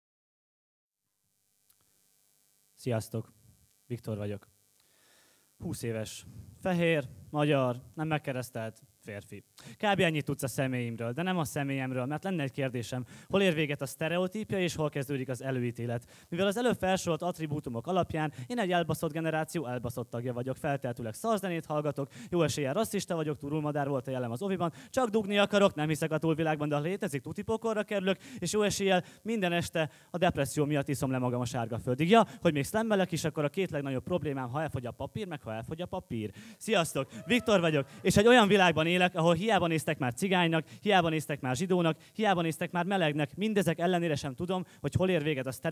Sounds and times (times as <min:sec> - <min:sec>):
Speech: 0:02.8 - 0:03.3, 0:03.9 - 0:04.5, 0:05.6 - 0:45.7.